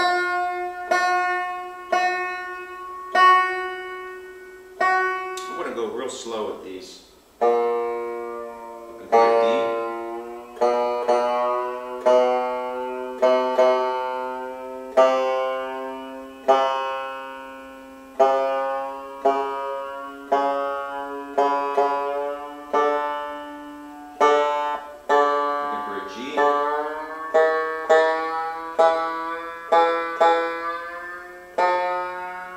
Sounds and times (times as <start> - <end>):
Music: 0.0 - 32.5
Speech: 5.4 - 7.1, 9.0 - 9.9, 25.7 - 26.7.